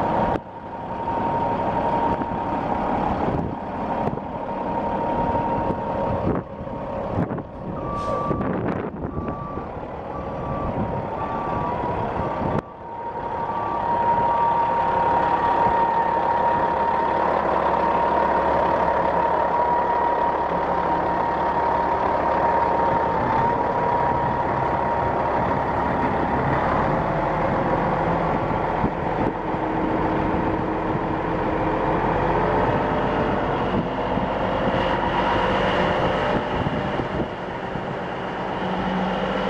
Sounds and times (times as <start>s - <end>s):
Vehicle: 0.0s - 39.4s.